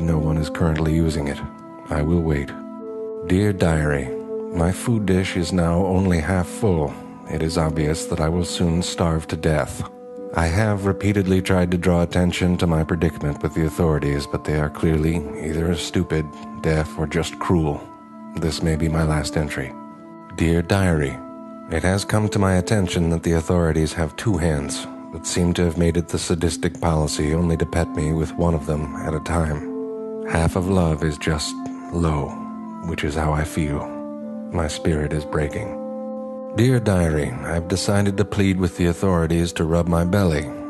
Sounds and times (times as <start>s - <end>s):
Speech: 0.0s - 2.6s, 3.2s - 29.7s, 30.3s - 35.8s, 36.6s - 40.7s
Music: 0.0s - 40.7s.